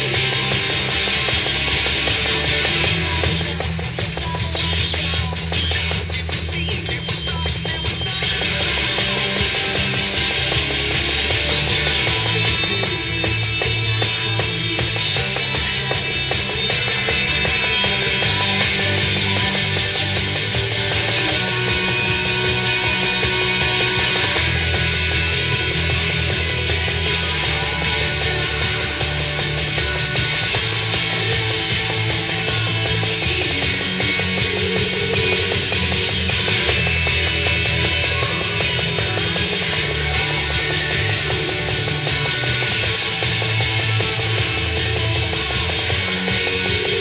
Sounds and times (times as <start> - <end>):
Guitar: 0.0 - 47.0.